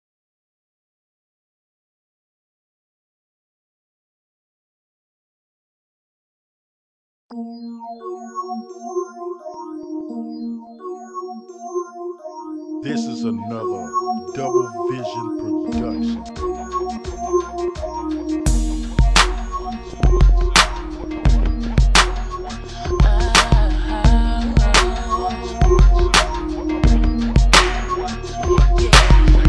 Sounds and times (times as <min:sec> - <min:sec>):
Music: 0:07.3 - 0:29.4.